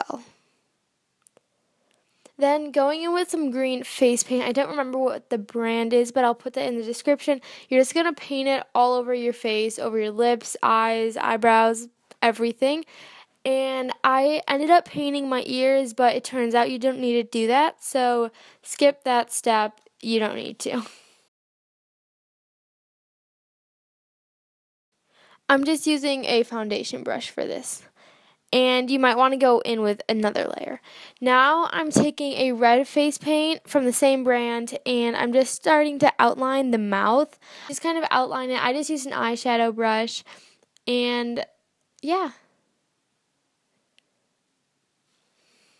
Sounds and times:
Speech: 0.0s - 0.3s, 2.4s - 12.9s, 13.5s - 21.0s, 25.5s - 27.9s, 28.5s - 40.3s, 40.9s - 42.4s.

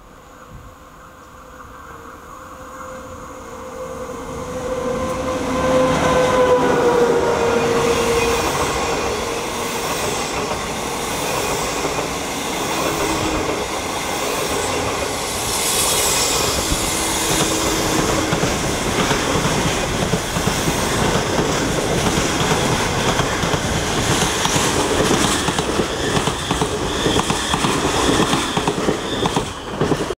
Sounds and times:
Railroad car, train wagon: 0.0s - 30.1s
Train: 0.0s - 30.1s.

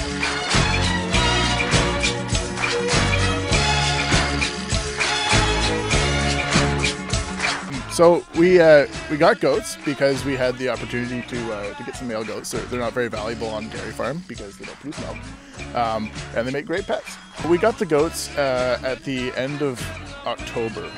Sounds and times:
Music: 0.0s - 20.9s
Speech: 7.7s - 15.2s, 15.8s - 20.9s.

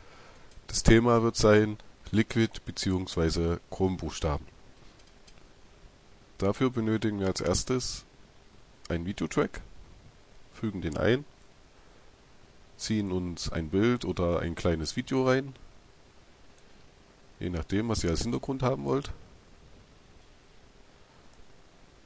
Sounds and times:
Speech: 0.7s - 4.5s, 6.4s - 8.1s, 8.9s - 9.7s, 10.6s - 11.3s, 12.8s - 15.6s, 17.4s - 19.2s.

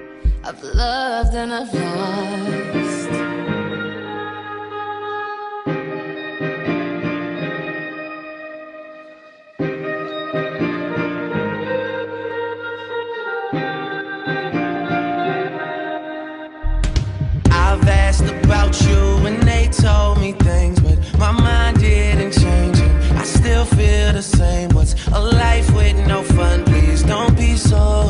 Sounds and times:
Music: 0.0s - 28.0s.

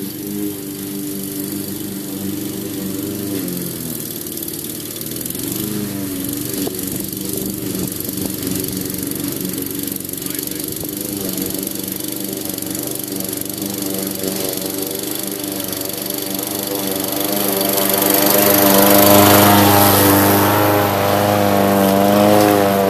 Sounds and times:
Lawn mower: 0.0s - 22.8s.

